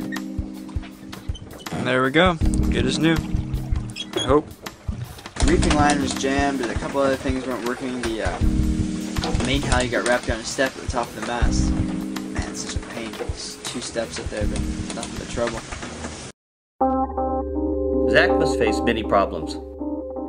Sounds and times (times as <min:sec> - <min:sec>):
Music: 0:00.0 - 0:15.6, 0:16.8 - 0:20.2
Boat, Water vehicle: 0:00.4 - 0:16.3
Speech: 0:05.4 - 0:08.4, 0:09.4 - 0:11.7, 0:12.4 - 0:15.6, 0:18.1 - 0:19.6.